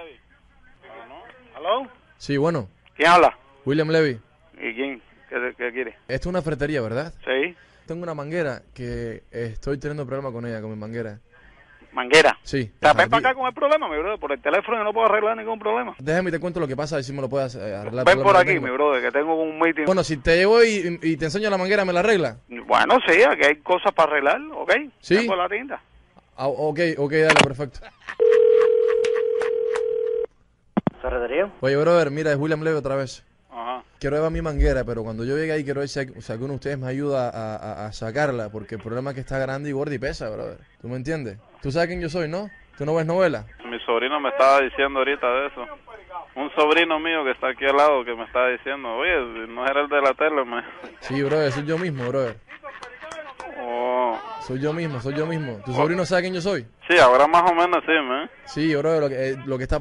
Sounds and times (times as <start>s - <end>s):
Radio: 4.5s - 6.1s, 11.4s - 16.0s, 22.5s - 25.8s, 30.8s - 31.6s, 42.3s - 54.1s, 56.8s - 58.6s.